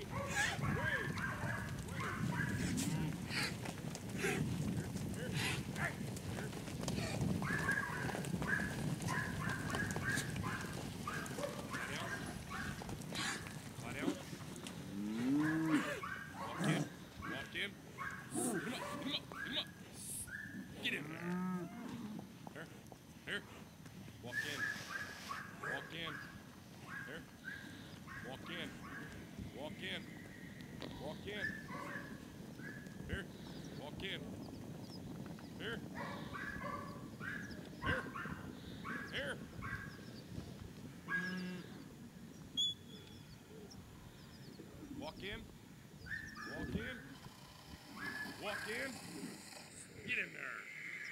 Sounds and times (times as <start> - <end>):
Cattle, bovinae: 0.0 - 45.4, 46.0 - 51.1.